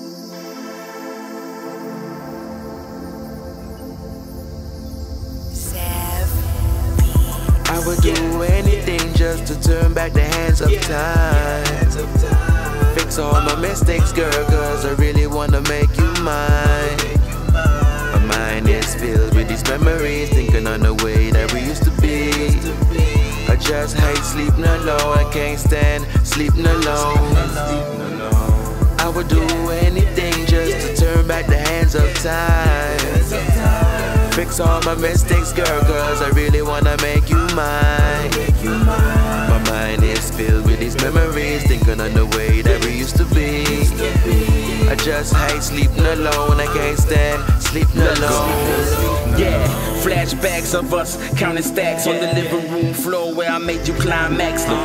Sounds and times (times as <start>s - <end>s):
Music: 0.0s - 54.8s.